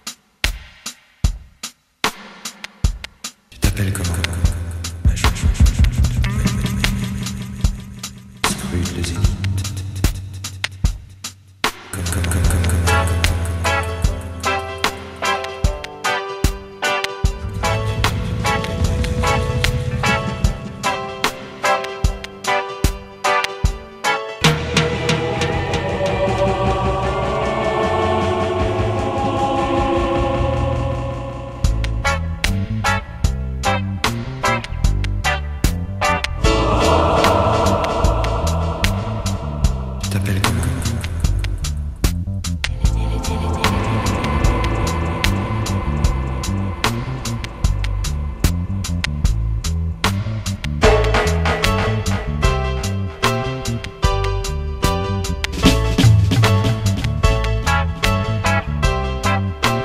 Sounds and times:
Music: 0.0s - 59.8s.

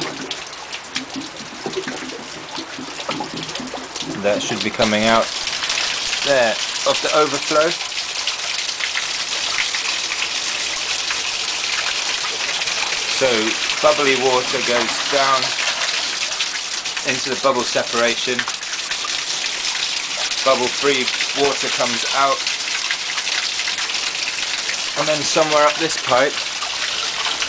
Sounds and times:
Water: 0.0s - 27.4s.

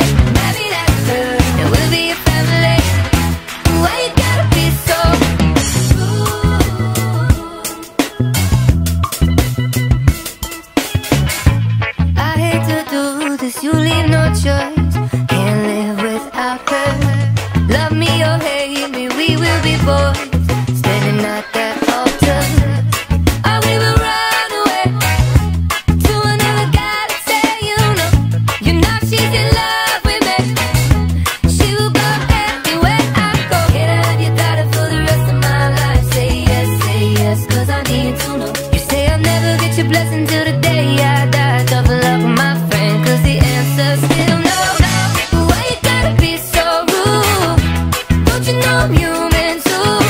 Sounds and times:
Funk: 0.0s - 50.1s.

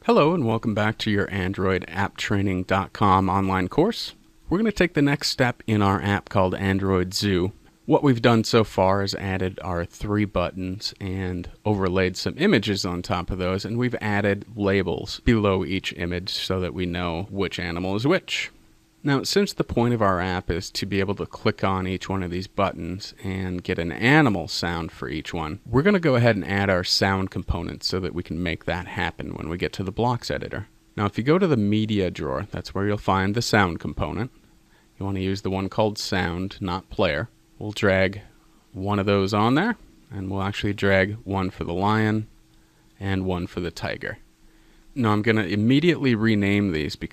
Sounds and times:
Speech: 0.0s - 34.4s, 35.0s - 42.3s, 43.0s - 44.2s, 45.0s - 47.1s.

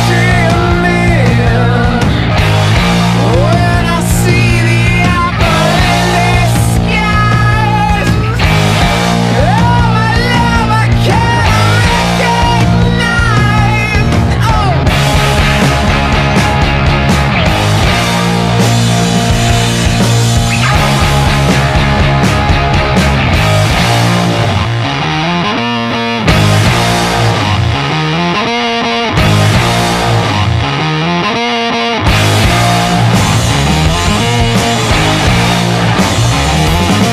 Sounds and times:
Punk rock: 0.0s - 37.1s.

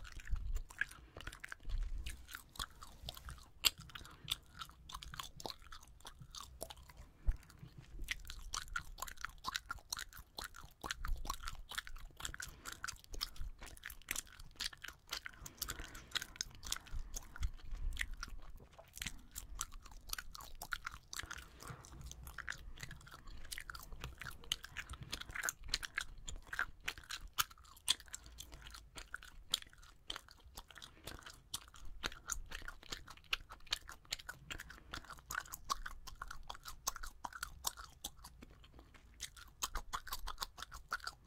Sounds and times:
Chewing, mastication: 0.0s - 41.2s.

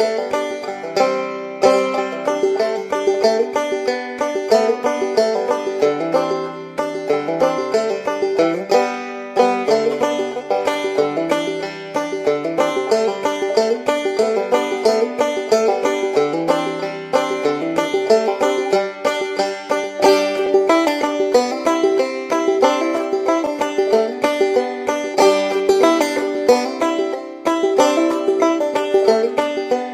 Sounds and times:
Music: 0.0s - 29.9s.

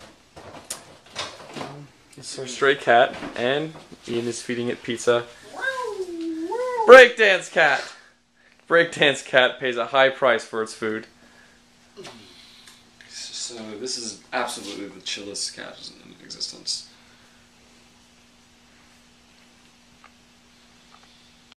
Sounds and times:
Speech: 1.7s - 8.0s, 8.7s - 11.1s, 13.1s - 16.9s.

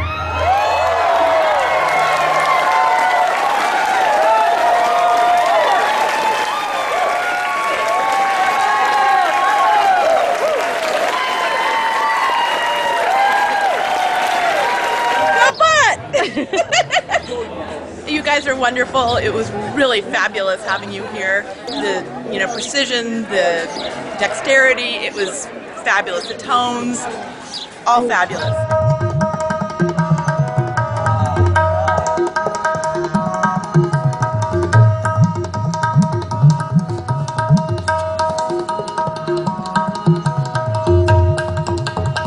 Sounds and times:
Speech: 18.1s - 27.2s, 27.9s - 28.6s
Music: 28.4s - 42.2s.

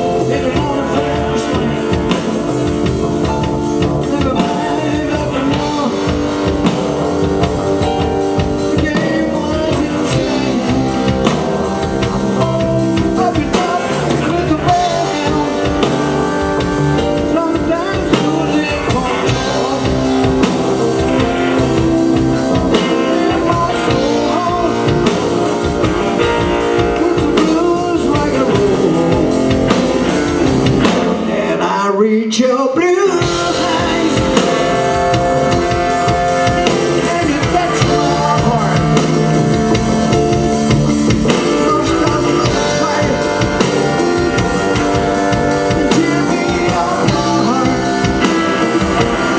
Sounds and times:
Blues: 0.0s - 49.3s.

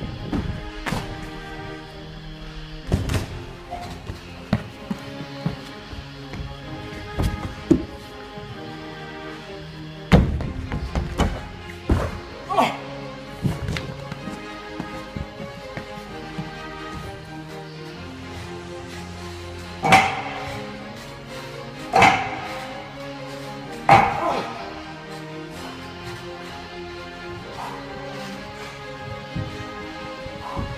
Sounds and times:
Music: 0.0s - 30.7s.

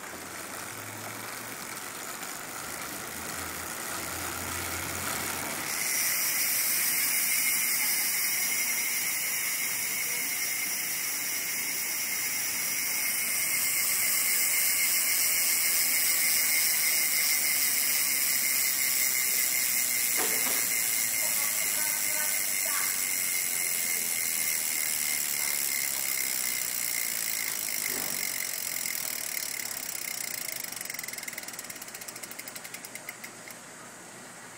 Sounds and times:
Speech: 21.2s - 24.3s.

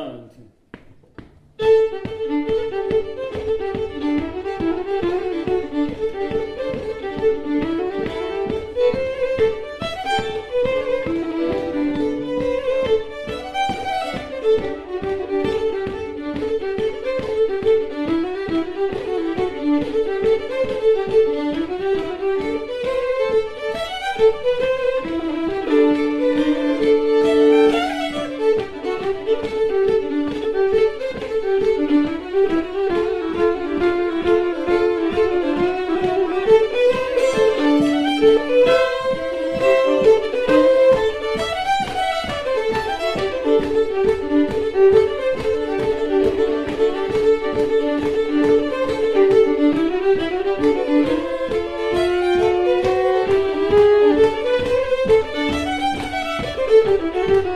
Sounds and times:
Violin, fiddle: 1.2s - 57.5s.

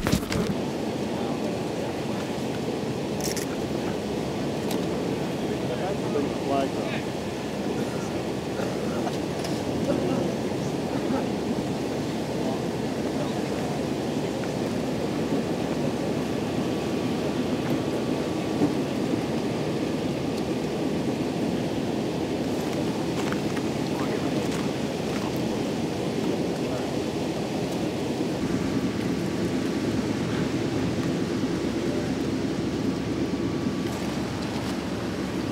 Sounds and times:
Speech: 1.0s - 2.5s, 5.4s - 7.2s, 9.8s - 11.4s, 12.3s - 14.5s, 23.9s - 24.6s.

